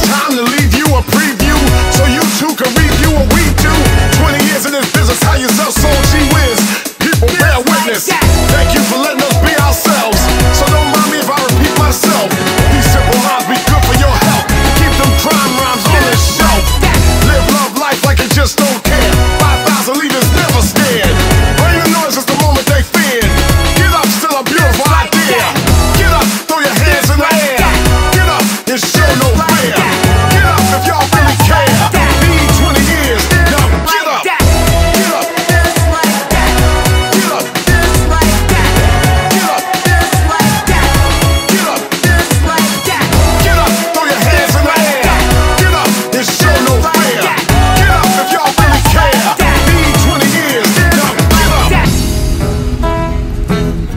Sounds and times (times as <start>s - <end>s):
Music: 0.0s - 53.9s.